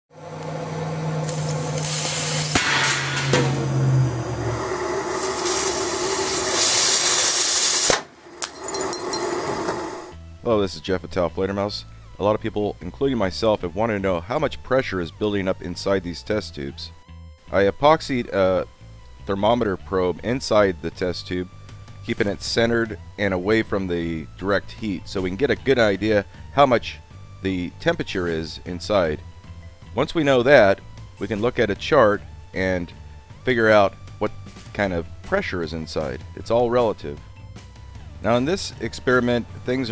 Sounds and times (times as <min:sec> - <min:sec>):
Outside, urban or manmade: 0:00.1 - 0:10.3.